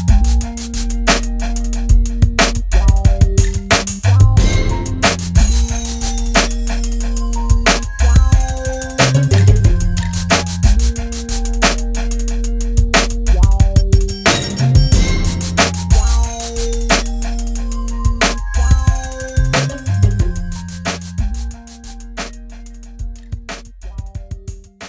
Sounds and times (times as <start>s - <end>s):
Hip hop music: 0.0s - 24.8s.